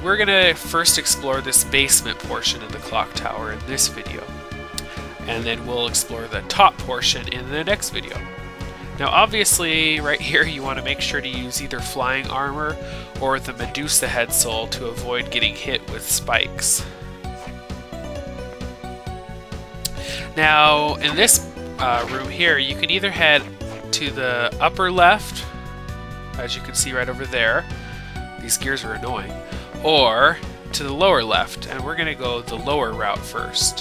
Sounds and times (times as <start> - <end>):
Speech: 0.0 - 4.3, 5.2 - 8.2, 9.0 - 16.9, 20.3 - 25.5, 26.4 - 27.7, 28.4 - 33.8
Music: 0.0 - 33.8.